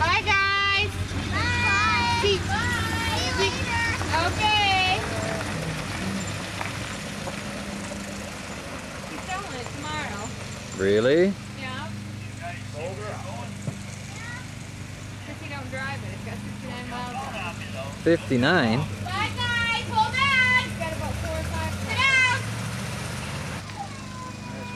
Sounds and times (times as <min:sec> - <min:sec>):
Car passing by: 0:00.6 - 0:14.2, 0:15.2 - 0:24.7.